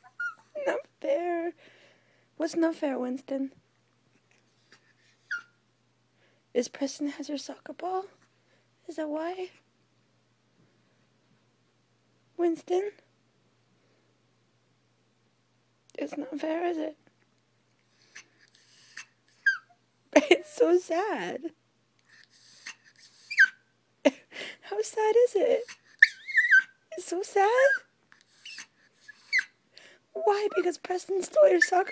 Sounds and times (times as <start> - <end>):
Whimper (dog): 0.0 - 0.8, 4.8 - 5.6, 18.0 - 20.6, 22.1 - 23.7, 25.6 - 26.8, 27.6 - 29.6, 30.4 - 31.9
Speech: 0.6 - 1.6, 2.4 - 3.6, 6.6 - 8.2, 8.8 - 9.6, 12.4 - 13.1, 15.9 - 17.0, 20.2 - 21.6, 24.7 - 25.6, 26.9 - 27.8, 30.2 - 31.9.